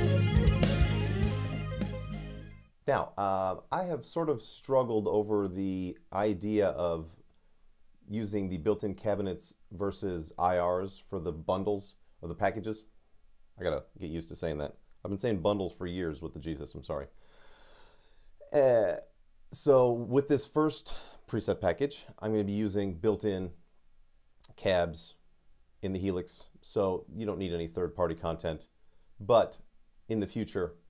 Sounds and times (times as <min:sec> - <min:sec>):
Speech: 0:02.9 - 0:07.2, 0:08.1 - 0:12.9, 0:13.6 - 0:17.1, 0:18.4 - 0:23.6, 0:24.5 - 0:25.2, 0:25.8 - 0:30.8.